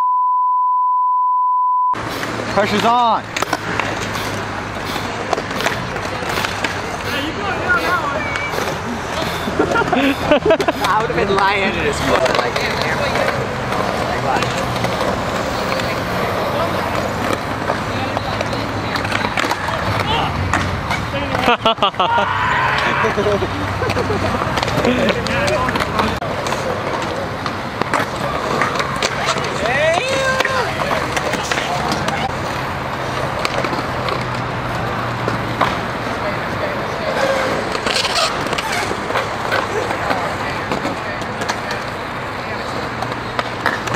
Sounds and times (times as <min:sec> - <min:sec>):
Skateboard: 0:02.0 - 0:21.6, 0:22.3 - 0:43.9.